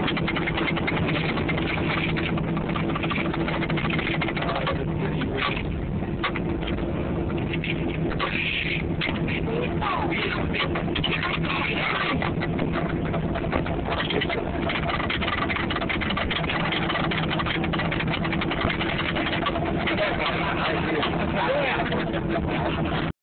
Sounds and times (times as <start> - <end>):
Speech: 8.2 - 12.3, 19.8 - 22.3.